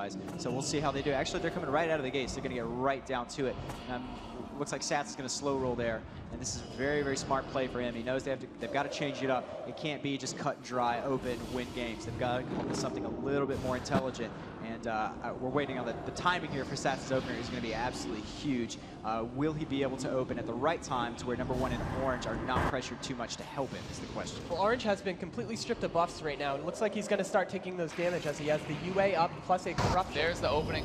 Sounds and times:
Speech: 0.0 - 30.8.

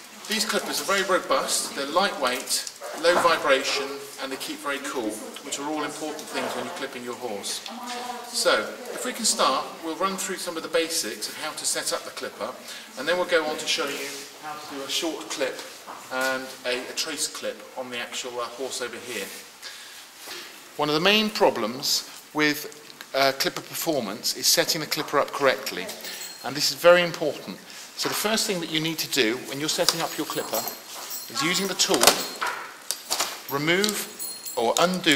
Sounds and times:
Speech: 0.3 - 19.4, 20.8 - 32.3.

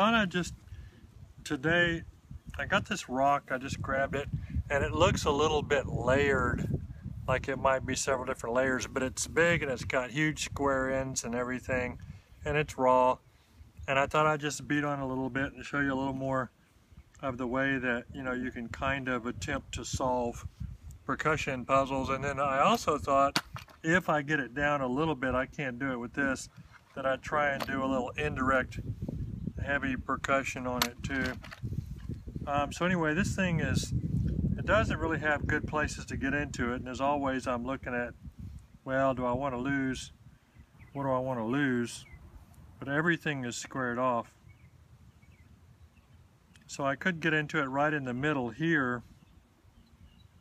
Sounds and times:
Speech: 0.0 - 0.6, 1.4 - 6.7, 7.3 - 13.2, 13.8 - 16.5, 17.2 - 20.5, 21.1 - 28.8, 29.6 - 31.4, 32.4 - 34.0, 34.6 - 38.2, 38.8 - 40.1, 41.0 - 42.0, 42.8 - 44.3, 46.6 - 49.1.

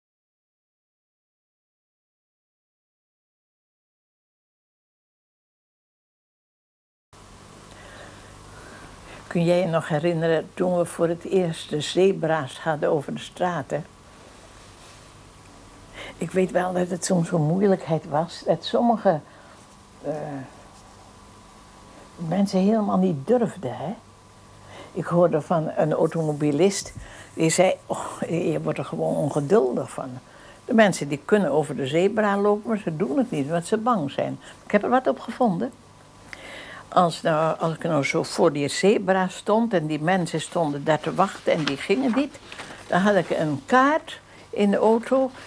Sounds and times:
Speech: 9.3 - 13.9, 16.2 - 19.3, 20.0 - 20.6, 22.2 - 24.0, 25.0 - 35.8, 36.9 - 45.4.

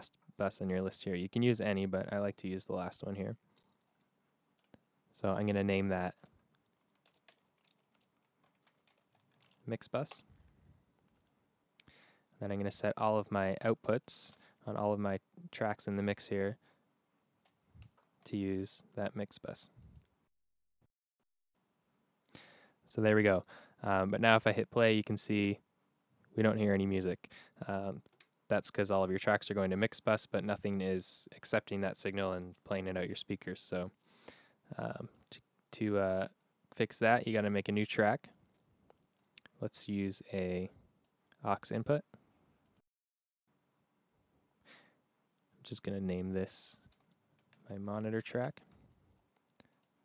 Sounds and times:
Speech: 0.0 - 3.4, 5.2 - 6.2, 9.7 - 10.2, 12.4 - 16.6, 18.2 - 19.8, 22.9 - 25.6, 26.4 - 34.0, 34.7 - 38.3, 39.6 - 40.8, 41.4 - 42.1, 45.6 - 46.8, 47.6 - 48.7.

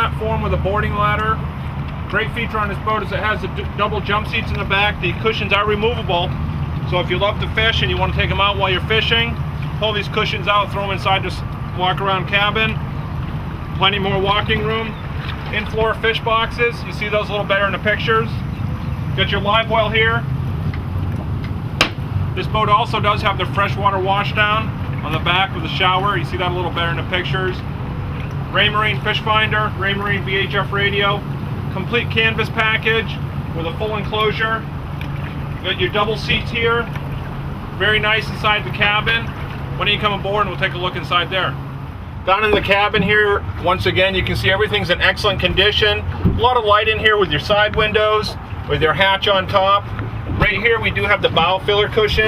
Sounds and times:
Speech: 0.0 - 1.4, 2.1 - 12.8, 13.8 - 18.4, 19.2 - 20.2, 22.4 - 27.6, 28.5 - 34.7, 35.6 - 37.0, 37.8 - 41.6, 42.3 - 52.2
Motorboat, speedboat: 0.0 - 52.2.

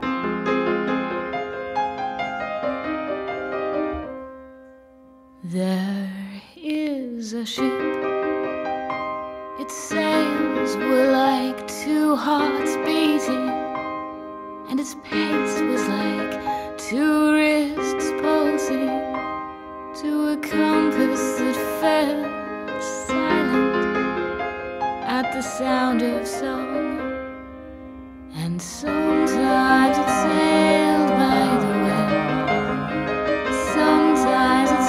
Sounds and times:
Music: 0.0 - 34.8.

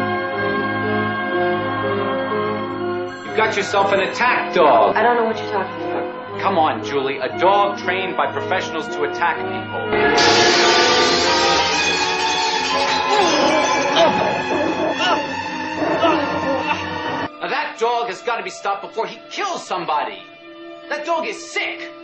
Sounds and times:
Music: 0.0 - 22.0
Speech: 3.3 - 9.5, 17.4 - 20.3, 20.9 - 21.9.

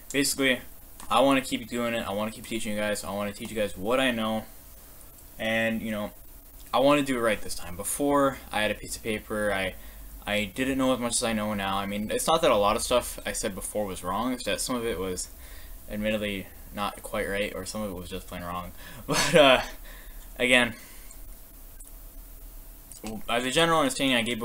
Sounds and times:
Speech: 0.1 - 4.5, 5.4 - 15.3, 15.9 - 18.7, 20.4 - 20.8, 23.0 - 24.4.

